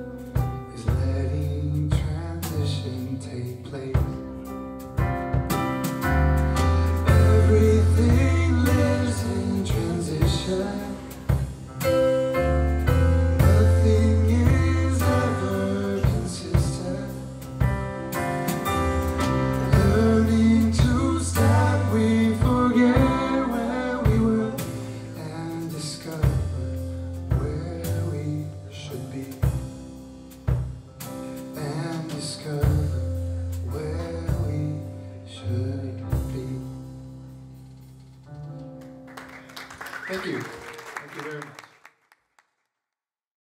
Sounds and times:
Music: 0.0 - 41.6.

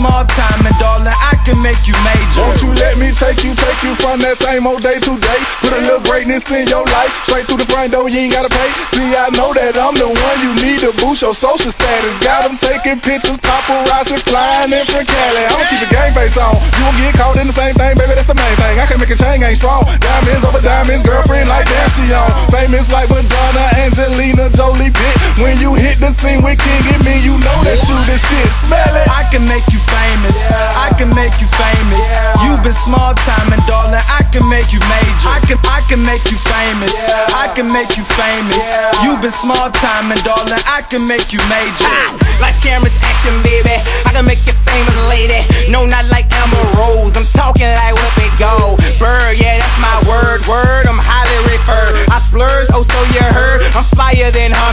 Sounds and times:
Music: 0.0 - 54.7.

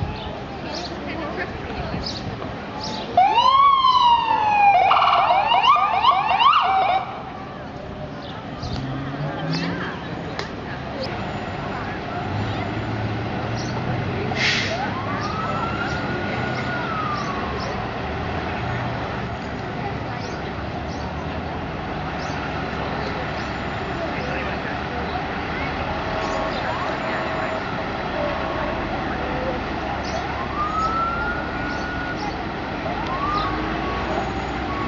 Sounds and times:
Traffic noise, roadway noise: 0.0 - 34.8
Fire engine, fire truck (siren): 3.2 - 7.3, 14.4 - 18.0, 25.7 - 34.8.

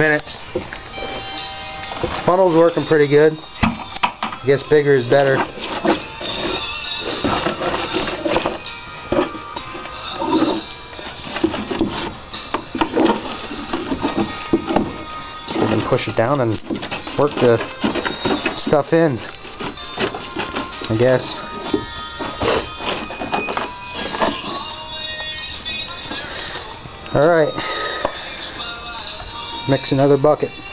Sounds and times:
Music: 0.0 - 30.7
Speech: 15.6 - 16.6, 17.2 - 17.7, 20.9 - 21.4, 27.1 - 27.6, 29.7 - 30.6.

